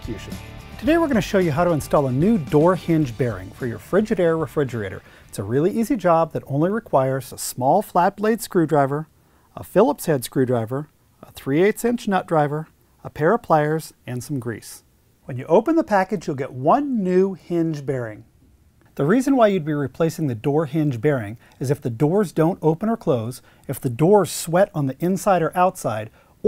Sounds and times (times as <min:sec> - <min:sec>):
Speech: 0:00.0 - 0:18.3, 0:19.0 - 0:26.4.